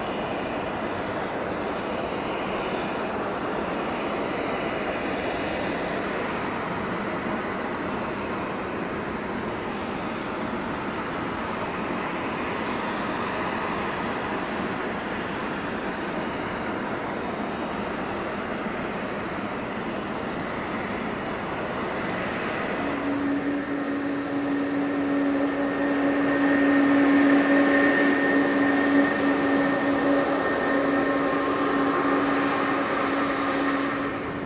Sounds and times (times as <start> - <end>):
Fixed-wing aircraft, airplane: 0.0 - 34.4.